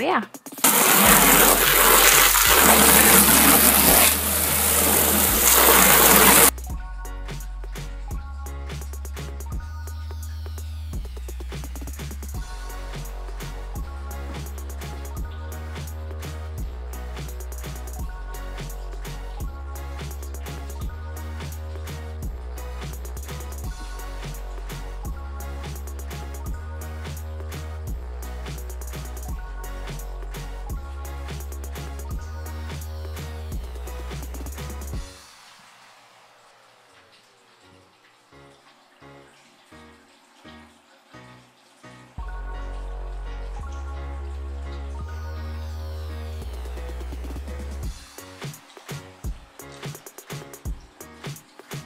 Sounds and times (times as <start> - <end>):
Music: 0.0 - 35.9, 37.7 - 51.8.